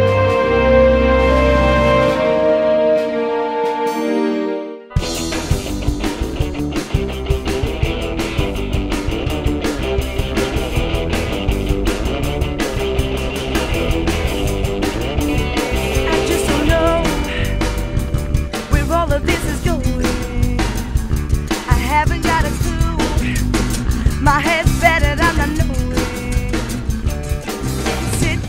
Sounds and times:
Music: 0:00.0 - 0:28.4.

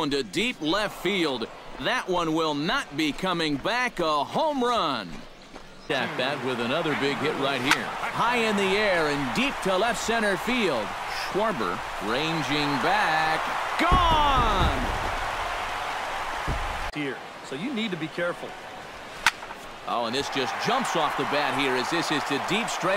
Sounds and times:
Speech: 0:00.0 - 0:05.2, 0:05.9 - 0:14.9, 0:19.9 - 0:22.9.

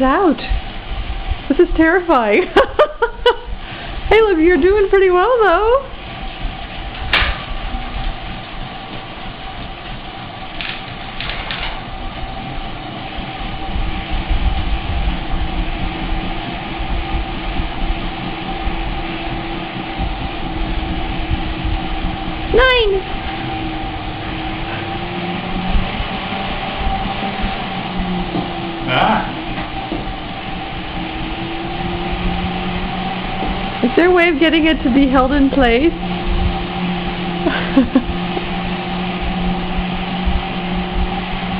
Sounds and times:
Speech: 0:04.1 - 0:05.9.

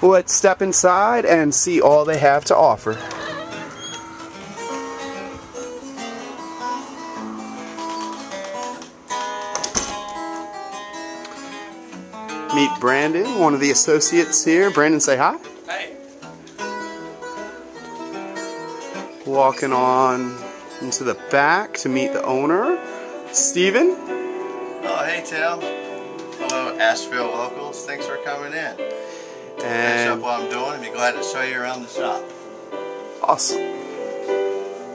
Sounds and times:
Speech: 0:00.0 - 0:03.0, 0:12.5 - 0:15.9, 0:19.2 - 0:22.8, 0:29.6 - 0:32.2, 0:33.2 - 0:33.7
Acoustic guitar: 0:00.0 - 0:34.9
Strum: 0:01.8 - 0:34.9.

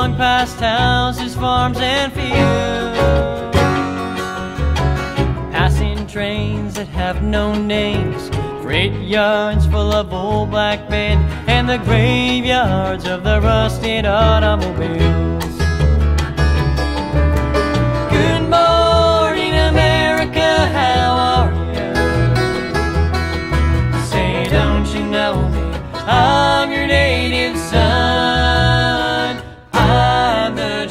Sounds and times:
Country: 0:00.0 - 0:30.9.

